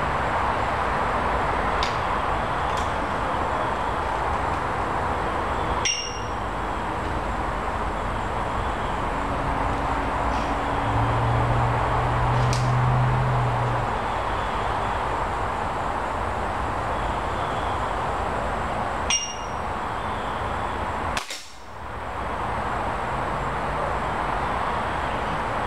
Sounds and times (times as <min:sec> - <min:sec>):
White noise: 0:00.0 - 0:25.6.